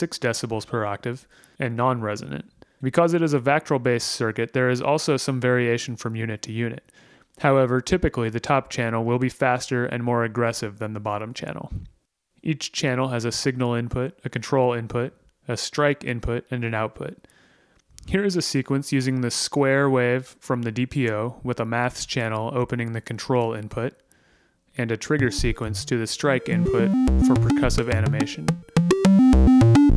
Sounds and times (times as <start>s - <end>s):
Speech: 0.0s - 17.2s, 18.0s - 24.0s, 24.8s - 28.5s.